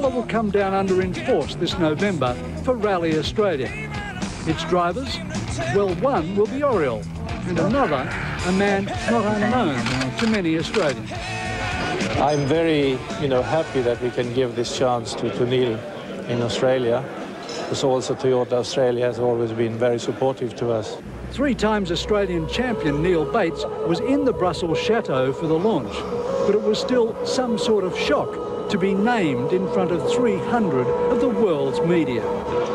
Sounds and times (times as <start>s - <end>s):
Music: 0.0s - 17.8s, 21.0s - 32.7s
Speech: 4.5s - 11.1s, 12.2s - 17.1s.